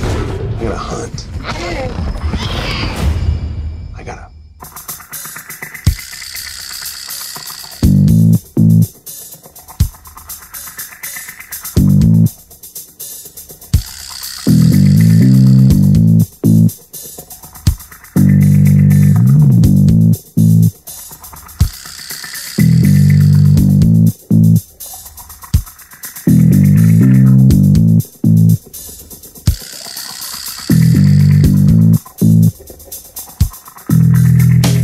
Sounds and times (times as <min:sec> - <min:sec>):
Drum machine: 0:04.6 - 0:34.8.